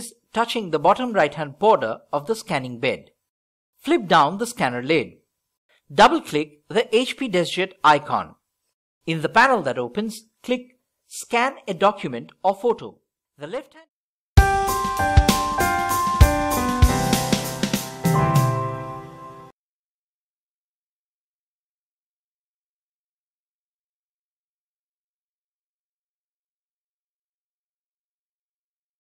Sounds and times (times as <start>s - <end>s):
Speech: 0.0s - 3.2s, 3.8s - 5.2s, 5.9s - 8.4s, 9.1s - 13.9s
Music: 14.4s - 19.5s.